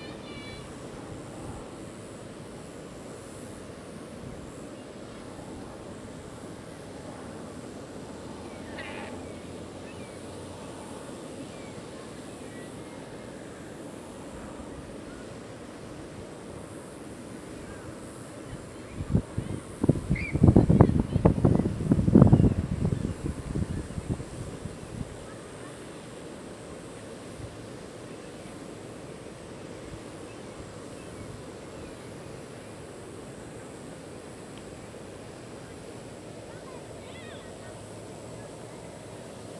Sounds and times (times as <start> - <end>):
Bee, wasp, etc.: 0.0 - 39.5
Outside, rural or natural: 0.0 - 39.5
Wind: 0.0 - 39.5.